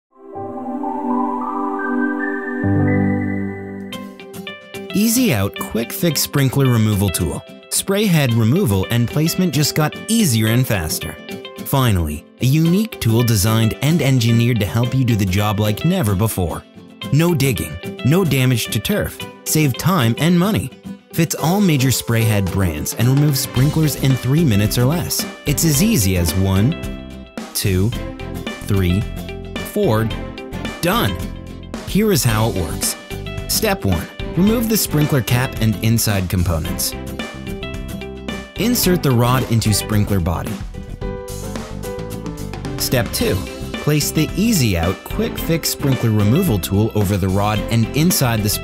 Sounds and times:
Music: 0.1 - 48.6
Speech: 4.9 - 26.8, 27.6 - 28.0, 28.6 - 30.2, 30.8 - 31.2, 31.9 - 37.0, 38.6 - 40.6, 42.8 - 48.6.

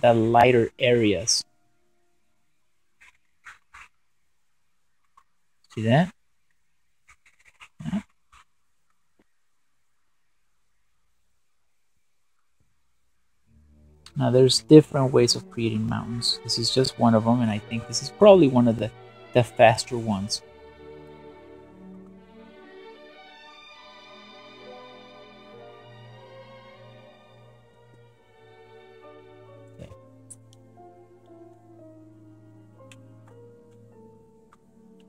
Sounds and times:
Speech: 0.0 - 1.4, 5.7 - 6.2, 7.8 - 8.1, 14.1 - 20.4
Inside, small room: 0.0 - 35.0.

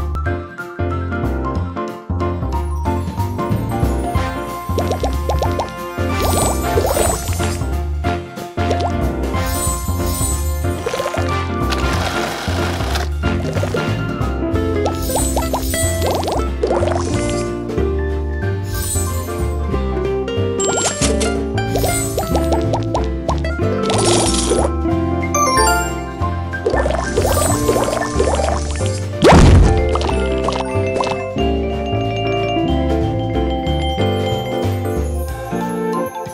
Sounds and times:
Music: 0.0 - 36.3.

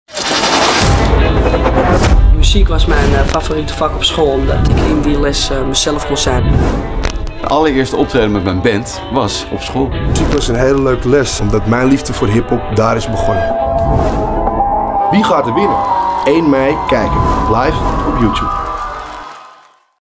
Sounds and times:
Music: 0.2 - 19.9
Speech: 2.4 - 6.5, 7.4 - 13.5, 15.1 - 18.5.

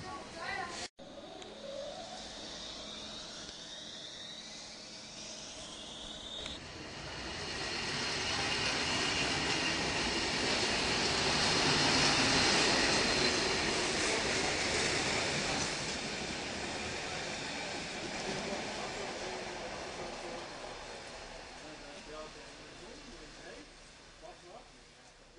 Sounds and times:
Railroad car, train wagon: 0.0 - 25.3
Train: 0.0 - 25.3.

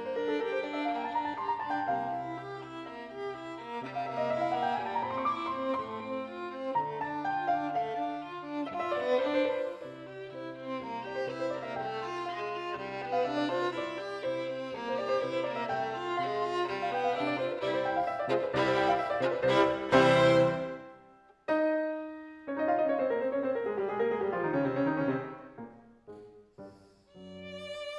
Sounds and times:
Violin, fiddle: 0.0 - 21.0, 26.6 - 27.9.

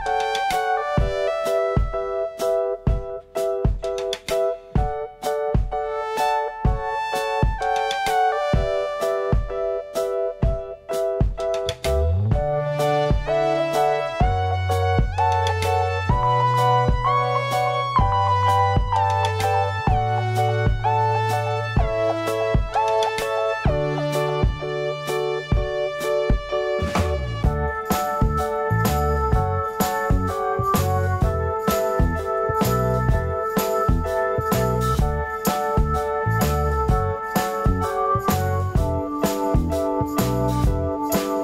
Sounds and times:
Music: 0.0 - 41.4.

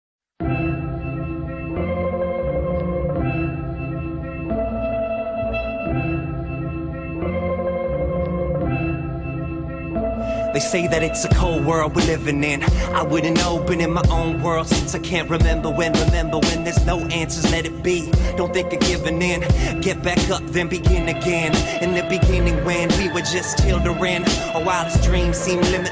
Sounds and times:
Music: 0.4 - 25.9.

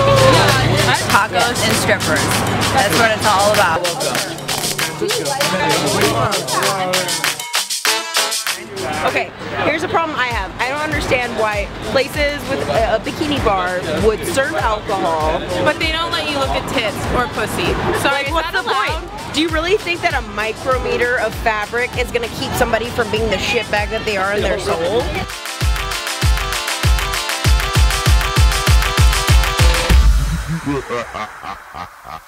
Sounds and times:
Music: 0.0 - 30.8
Speech: 8.6 - 25.3.

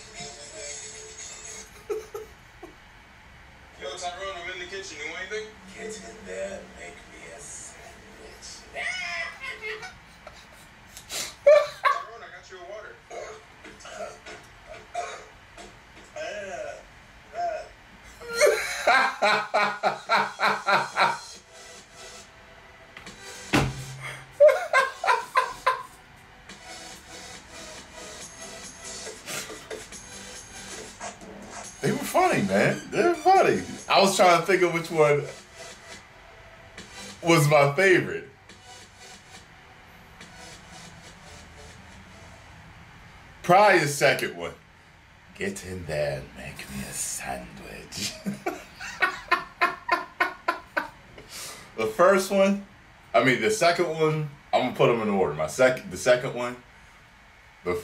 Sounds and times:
Speech: 3.8 - 8.7, 31.8 - 35.4, 37.2 - 38.3, 43.5 - 44.6, 45.4 - 48.2, 51.8 - 56.6.

